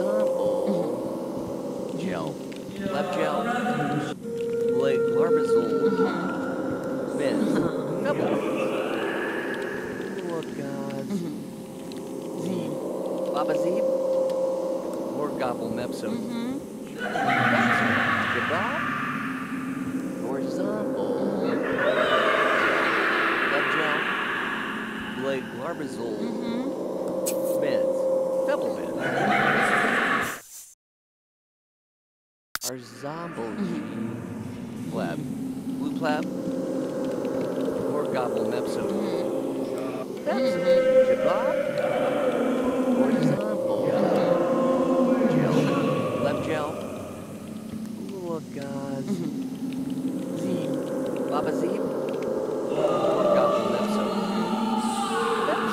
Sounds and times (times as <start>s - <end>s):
Speech: 0.0s - 1.0s, 1.9s - 6.4s, 7.1s - 9.3s, 10.1s - 11.4s, 12.4s - 13.8s, 15.2s - 18.9s, 20.2s - 24.2s, 25.2s - 26.8s, 27.5s - 27.9s, 28.5s - 30.0s, 32.6s - 34.2s, 34.8s - 36.3s, 37.8s - 46.9s, 48.0s - 49.3s, 50.4s - 51.8s, 52.7s - 55.7s.